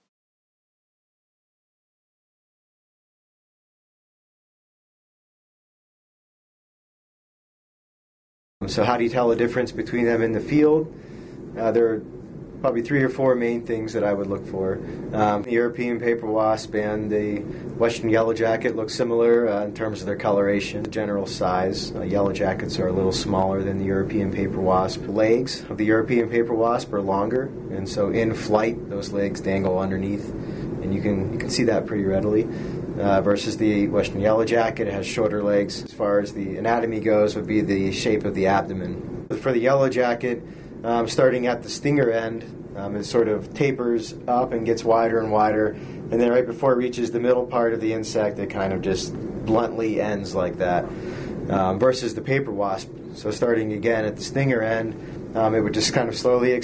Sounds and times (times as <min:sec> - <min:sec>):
Speech: 0:08.6 - 0:11.0, 0:11.6 - 0:56.6.